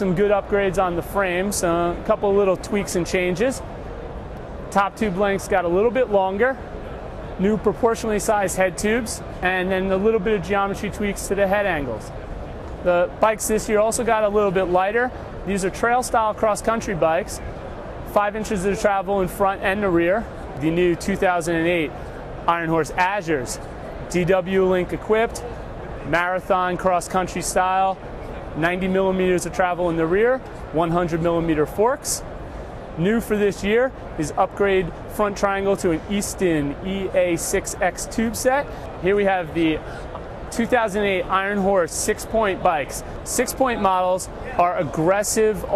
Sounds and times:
Speech: 0:00.0 - 0:03.7, 0:04.7 - 0:06.6, 0:07.4 - 0:12.1, 0:12.8 - 0:17.4, 0:18.1 - 0:21.9, 0:22.5 - 0:28.0, 0:28.6 - 0:32.3, 0:33.0 - 0:39.9, 0:40.5 - 0:45.7.

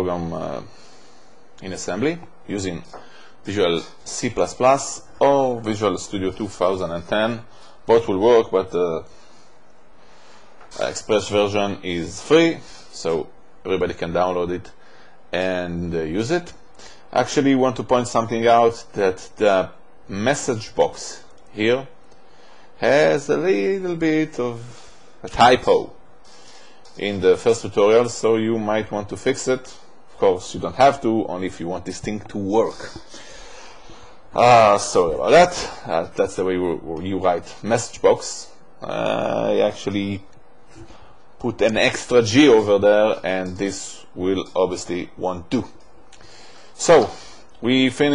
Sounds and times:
Speech: 0:00.0 - 0:00.8, 0:01.6 - 0:09.1, 0:10.7 - 0:22.0, 0:22.8 - 0:26.0, 0:26.9 - 0:33.1, 0:34.3 - 0:40.4, 0:41.4 - 0:45.8, 0:46.8 - 0:48.1.

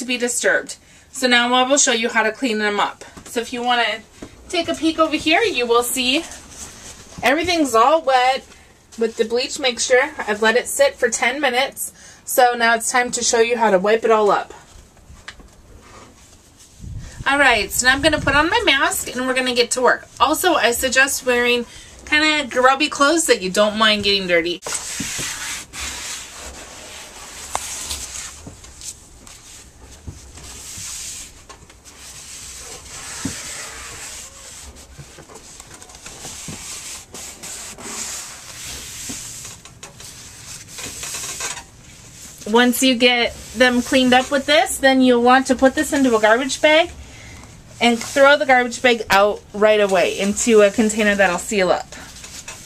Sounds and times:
Rub: 0:24.6 - 0:42.4, 0:43.0 - 0:44.7.

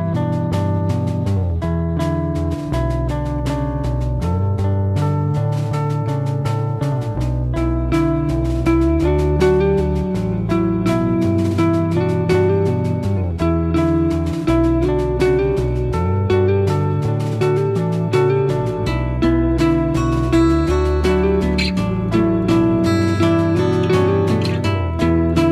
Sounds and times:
Inside, small room: 0:00.0 - 0:25.5
Music: 0:00.0 - 0:25.5.

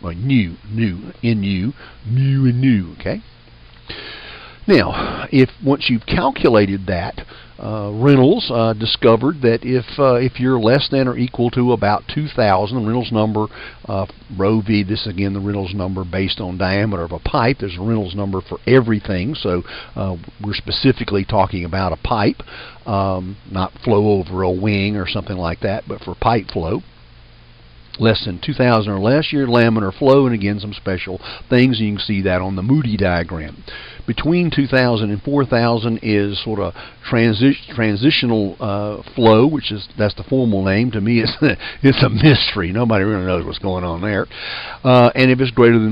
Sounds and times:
Narration, monologue: 0:00.0 - 0:45.9.

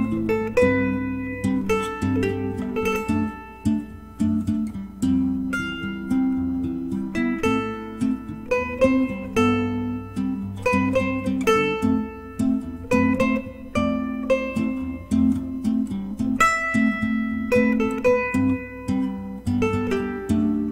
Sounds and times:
Acoustic guitar: 0:00.0 - 0:20.7
Strum: 0:00.0 - 0:20.7.

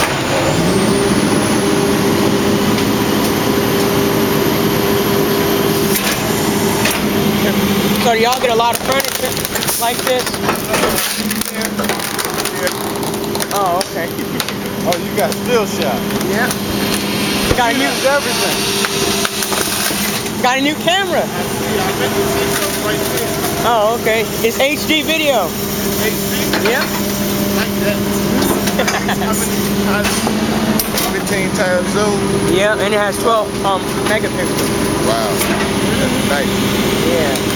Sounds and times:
Speech: 0:07.4 - 0:12.8, 0:13.4 - 0:16.6, 0:17.5 - 0:18.6, 0:20.4 - 0:30.3, 0:31.0 - 0:37.5.

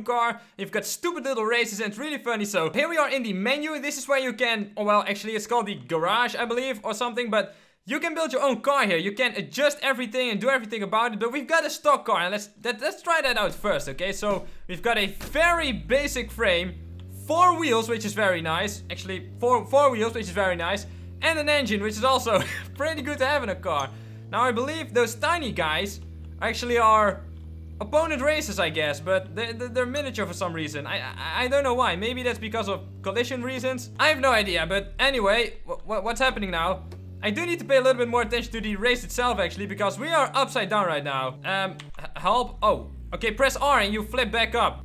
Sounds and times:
Speech: 0:00.0 - 0:27.2, 0:27.8 - 0:44.8.

